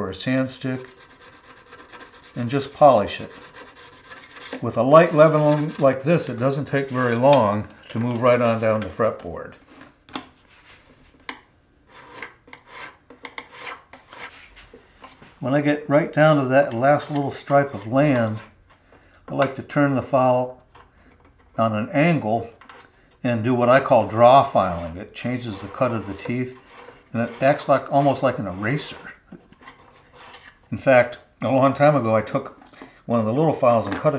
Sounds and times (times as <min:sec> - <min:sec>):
Speech: 0:00.0 - 0:00.9, 0:02.4 - 0:03.4, 0:04.6 - 0:09.6, 0:15.4 - 0:18.5, 0:19.3 - 0:20.6, 0:21.6 - 0:22.6, 0:23.2 - 0:29.2, 0:30.7 - 0:34.1.